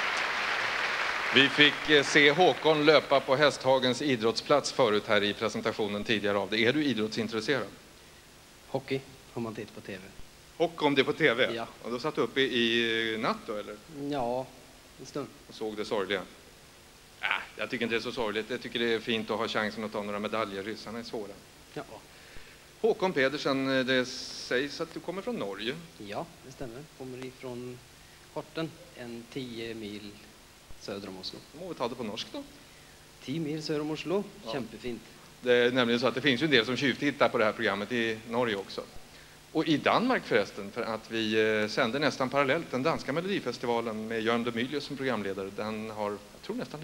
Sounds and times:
Speech: 0:01.4 - 0:07.8, 0:08.7 - 0:16.4, 0:17.2 - 0:22.0, 0:22.8 - 0:27.8, 0:28.4 - 0:32.6, 0:33.2 - 0:38.9, 0:39.6 - 0:46.8.

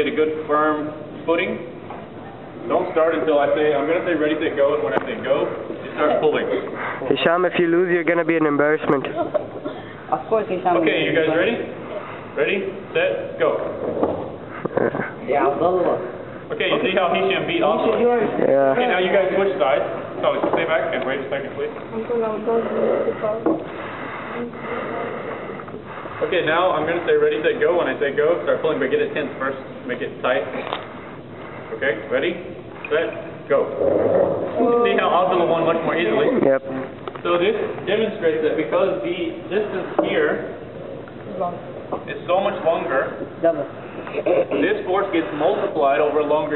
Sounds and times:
Inside, large room or hall: 0:00.0 - 0:07.4, 0:08.7 - 0:46.5.

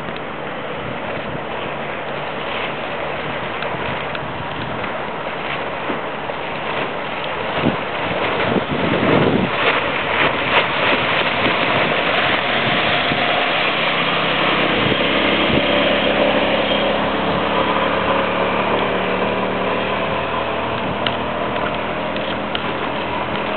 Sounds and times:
Boat, Water vehicle: 0:00.0 - 0:23.5.

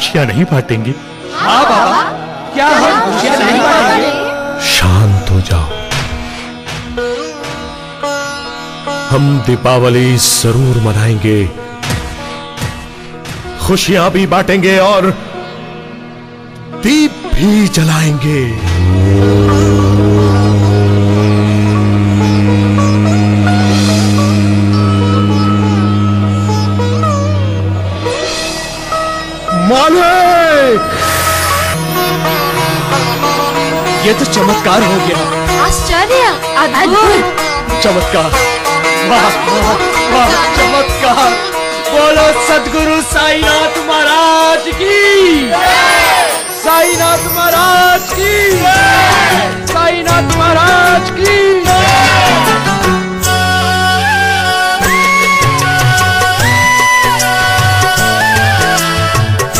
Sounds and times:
Music: 0:00.0 - 0:59.5.

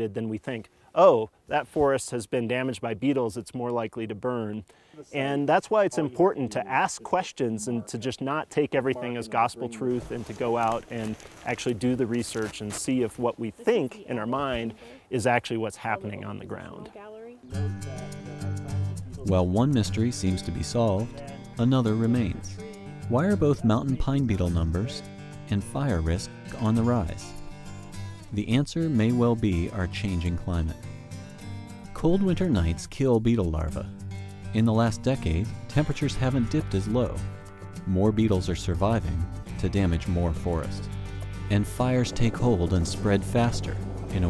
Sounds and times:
Speech: 0:00.0 - 0:27.3, 0:28.3 - 0:30.8, 0:32.0 - 0:33.9, 0:34.6 - 0:37.2, 0:37.9 - 0:40.9, 0:41.5 - 0:44.3.

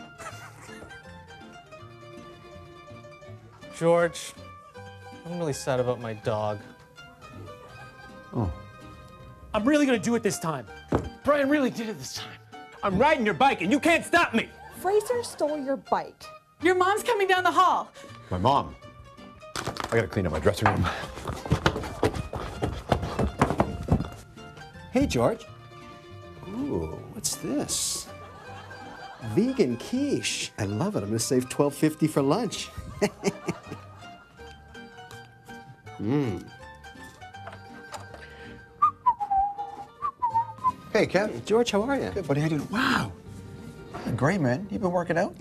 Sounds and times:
Music: 0:00.0 - 0:45.4.

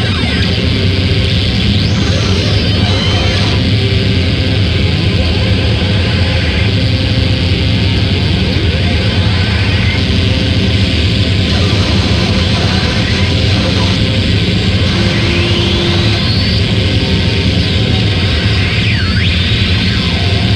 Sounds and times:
Cacophony: 0:00.0 - 0:20.5.

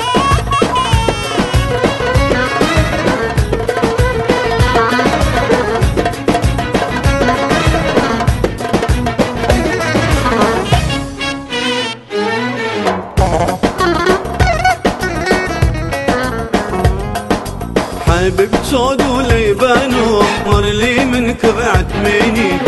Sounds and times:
Dance music: 0:00.0 - 0:12.0, 0:13.2 - 0:22.6
Middle Eastern music: 0:00.0 - 0:22.6.

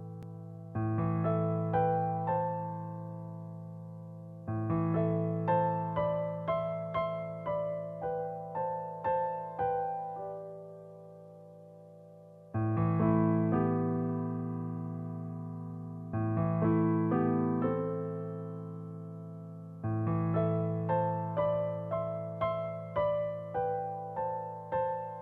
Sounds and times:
Electric piano: 0:00.0 - 0:25.2.

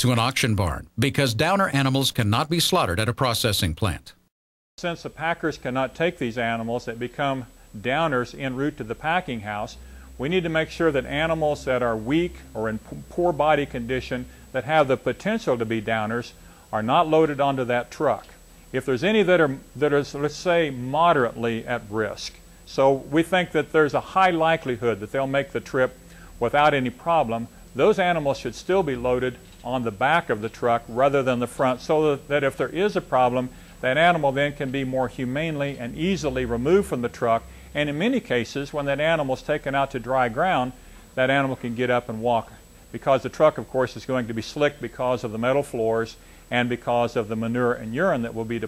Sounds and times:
Speech: 0:00.0 - 0:04.2, 0:04.8 - 0:48.6.

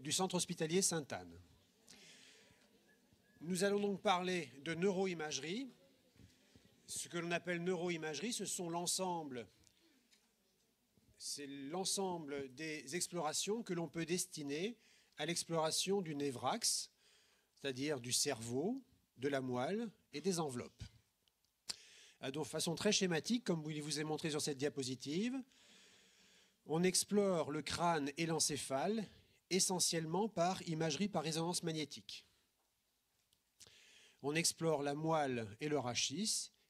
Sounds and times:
Speech: 0:00.0 - 0:01.9, 0:03.4 - 0:09.6, 0:11.2 - 0:16.9, 0:17.6 - 0:21.0, 0:22.2 - 0:25.5, 0:26.7 - 0:32.3, 0:34.2 - 0:36.6.

